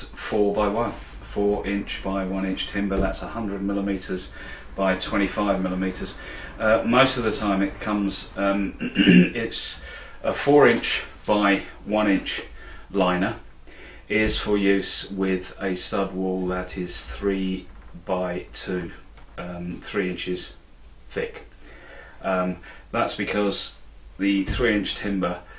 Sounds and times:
Speech: 0:00.0 - 0:13.4, 0:14.1 - 0:21.5, 0:22.2 - 0:25.5.

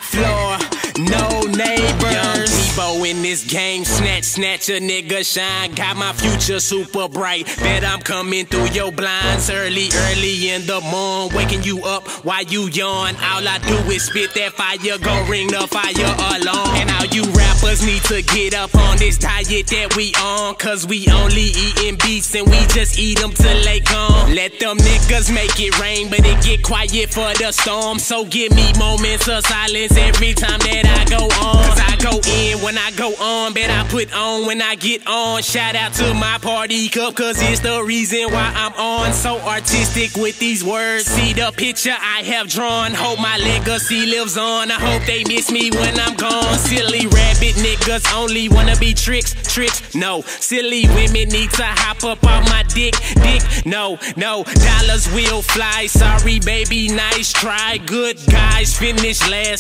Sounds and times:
Music: 0:00.0 - 0:53.7, 0:54.5 - 0:59.6.

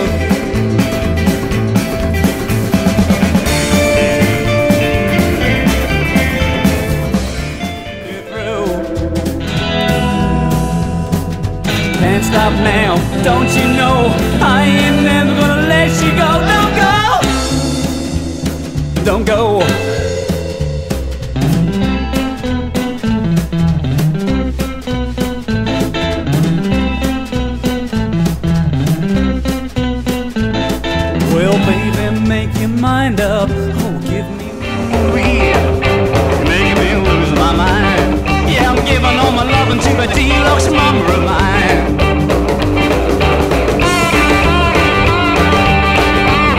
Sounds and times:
Music: 0:00.0 - 0:46.5.

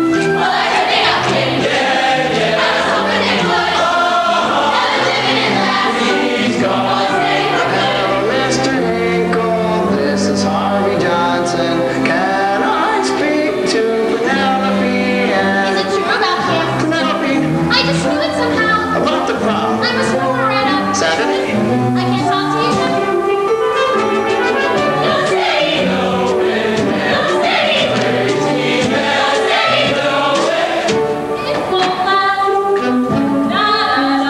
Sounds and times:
Choir: 0:00.0 - 0:17.4, 0:24.1 - 0:32.4, 0:33.5 - 0:34.2.

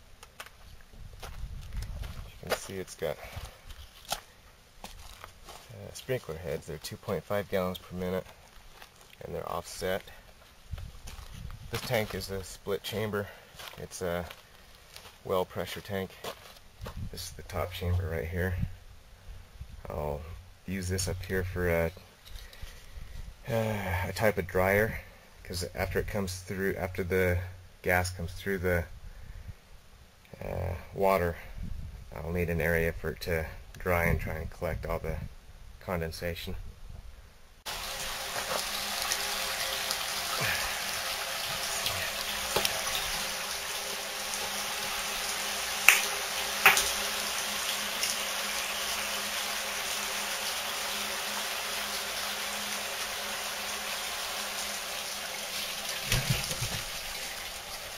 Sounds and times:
Speech: 0:02.3 - 0:03.4, 0:05.7 - 0:08.3, 0:09.2 - 0:10.2, 0:11.7 - 0:14.4, 0:15.2 - 0:16.3, 0:17.1 - 0:18.7, 0:19.8 - 0:22.0, 0:23.4 - 0:28.9, 0:30.3 - 0:31.5, 0:32.1 - 0:36.6.

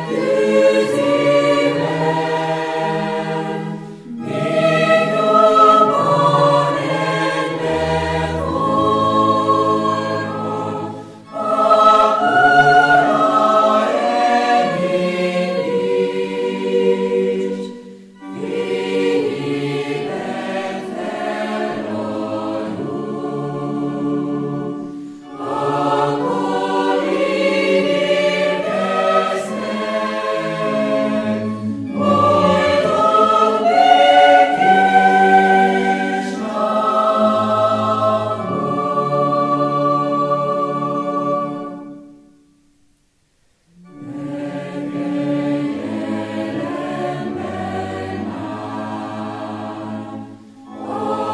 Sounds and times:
Bowed string instrument: 0:00.0 - 0:42.8, 0:43.6 - 0:51.3.

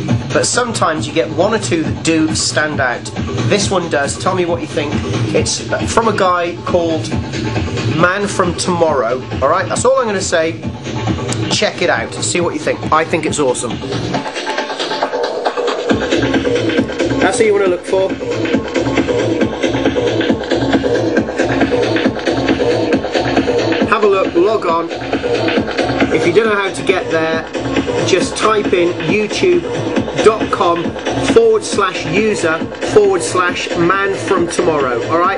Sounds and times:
Speech: 0:00.0 - 0:07.1, 0:07.9 - 0:10.6, 0:11.4 - 0:13.8, 0:17.2 - 0:18.2, 0:23.8 - 0:24.9, 0:26.1 - 0:27.4, 0:28.0 - 0:35.3
Techno: 0:00.0 - 0:35.3.

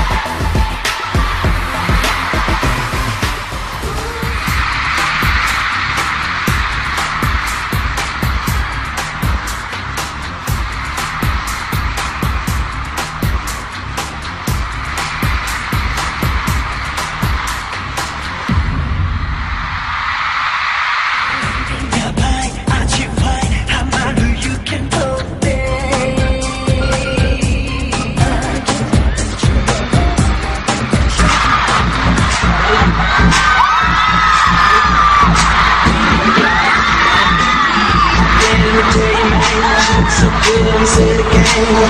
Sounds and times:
Singing: 0:00.0 - 0:05.1, 0:21.3 - 0:41.8
Pop music: 0:00.0 - 0:18.9, 0:20.8 - 0:41.8
Inside, large room or hall: 0:00.0 - 0:41.8.

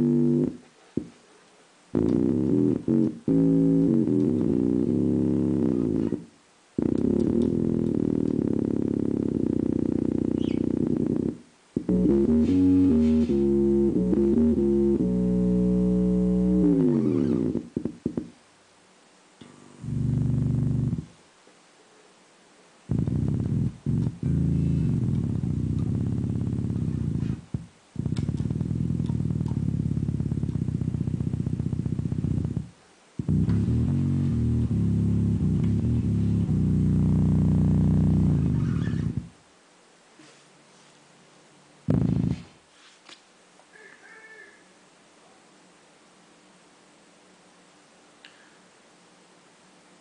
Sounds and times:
Music: 0:00.0 - 0:01.1, 0:01.9 - 0:18.3, 0:19.4 - 0:21.2, 0:22.9 - 0:39.3
Distortion: 0:00.0 - 0:50.0.

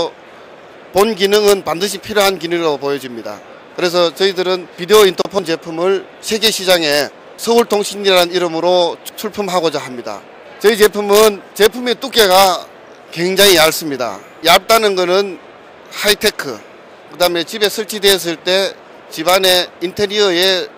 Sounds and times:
Speech: 0:01.0 - 0:20.7.

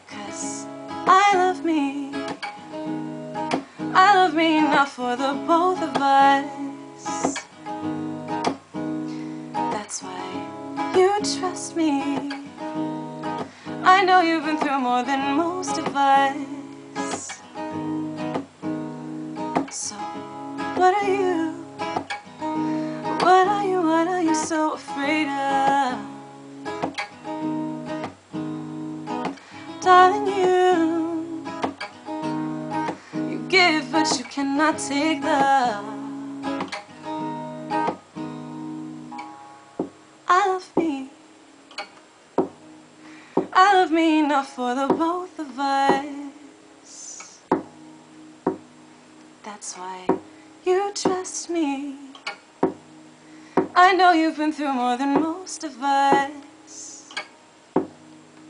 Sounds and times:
Music: 0:00.0 - 0:58.4.

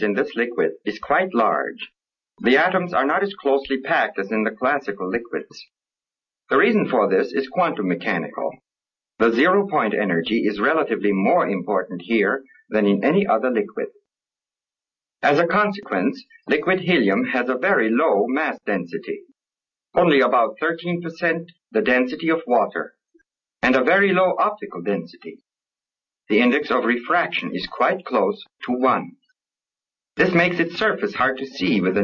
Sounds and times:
Speech: 0:00.0 - 0:05.8, 0:06.5 - 0:14.0, 0:15.2 - 0:23.0, 0:23.6 - 0:25.5, 0:26.3 - 0:29.3, 0:30.2 - 0:32.0.

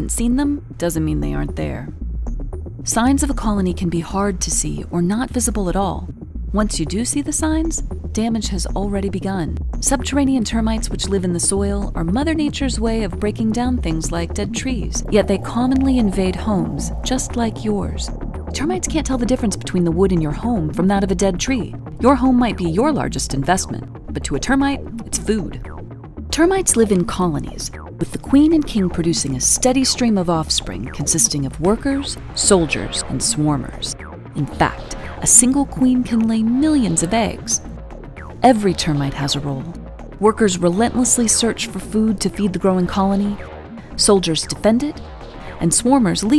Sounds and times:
Speech: 0:00.0 - 0:02.0, 0:02.9 - 0:25.6, 0:26.4 - 0:37.7, 0:38.4 - 0:43.4, 0:44.0 - 0:45.0, 0:45.6 - 0:46.3
Music: 0:00.0 - 0:46.3.

